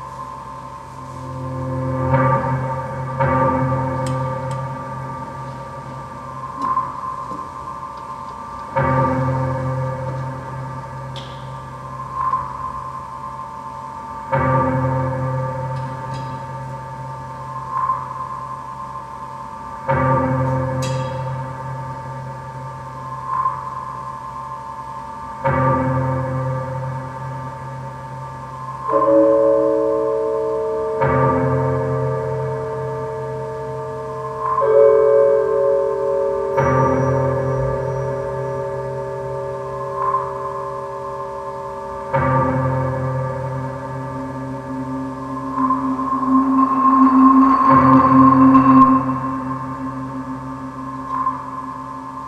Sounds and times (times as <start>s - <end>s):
Percussion: 0.0s - 52.2s.